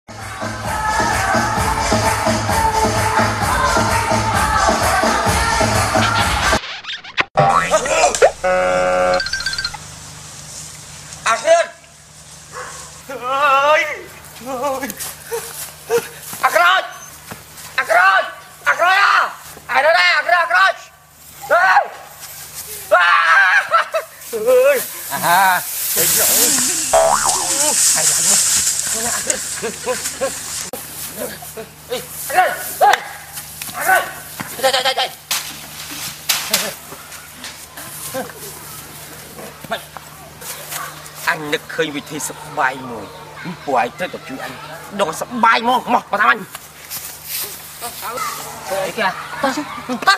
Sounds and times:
Music: 0.1s - 6.6s.

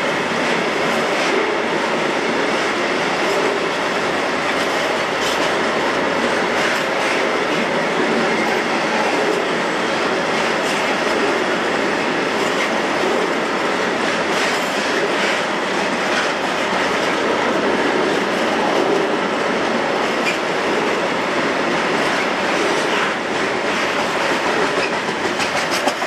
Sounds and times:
Railroad car, train wagon: 0.0s - 26.0s
Train: 0.0s - 26.0s
Clickety-clack: 0.4s - 1.7s, 2.5s - 3.8s, 4.4s - 9.6s, 10.3s - 11.4s, 12.3s - 21.1s, 21.7s - 26.0s.

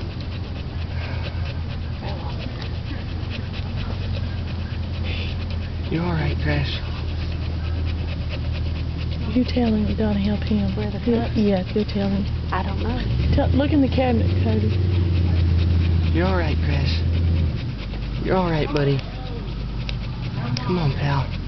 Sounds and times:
Whimper (dog): 14.1s - 21.4s.

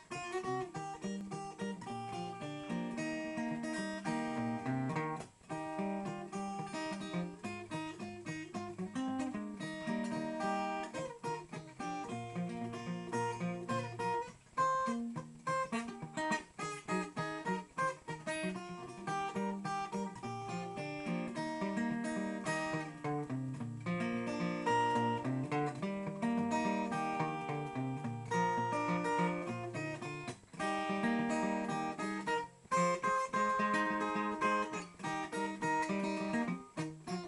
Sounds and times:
Music: 0.0s - 37.2s.

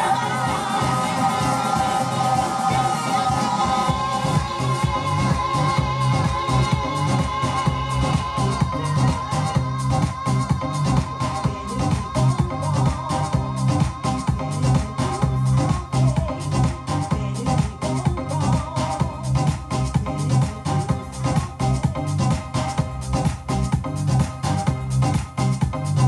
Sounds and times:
Disco: 0.0s - 26.0s.

